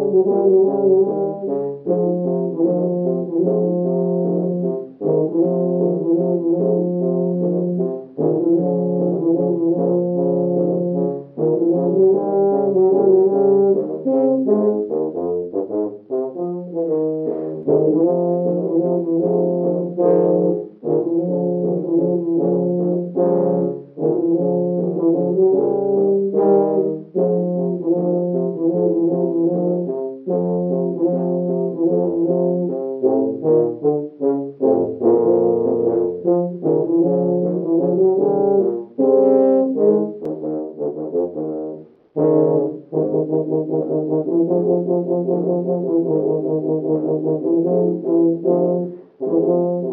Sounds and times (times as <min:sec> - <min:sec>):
Music: 0:00.0 - 0:49.9.